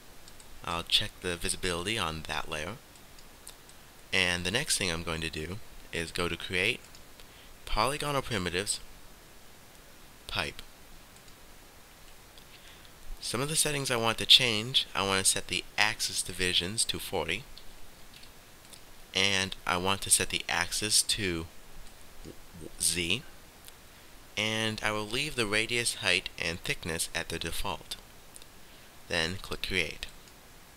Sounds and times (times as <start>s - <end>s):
Speech: 0.6s - 2.8s, 4.2s - 6.8s, 7.6s - 8.8s, 10.3s - 10.7s, 13.2s - 17.5s, 19.2s - 21.5s, 22.6s - 23.3s, 24.4s - 28.0s, 29.1s - 30.1s.